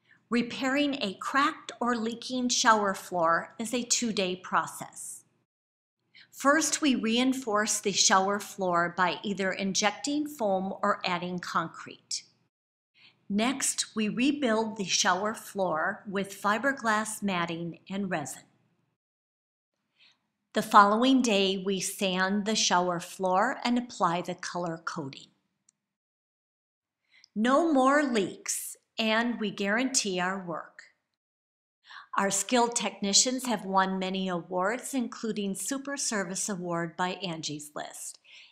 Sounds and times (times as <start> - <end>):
Speech: 0.3 - 5.3, 6.3 - 12.4, 13.3 - 18.6, 20.6 - 25.4, 27.4 - 31.0, 31.9 - 38.5.